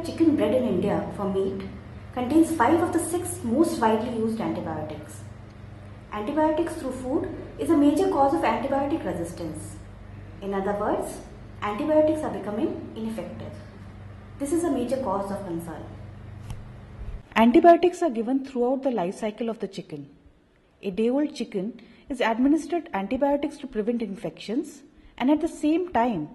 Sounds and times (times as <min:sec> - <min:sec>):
Speech: 0:00.0 - 0:05.3, 0:06.1 - 0:09.8, 0:10.4 - 0:13.7, 0:14.4 - 0:16.0, 0:17.4 - 0:20.2, 0:20.8 - 0:26.3.